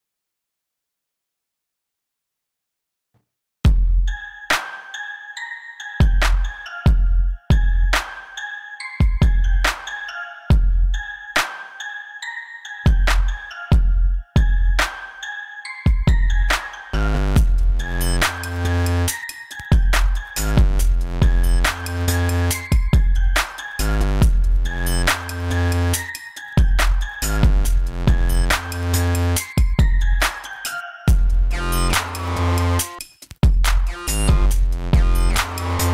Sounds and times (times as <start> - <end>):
Music: 3.7 - 35.9.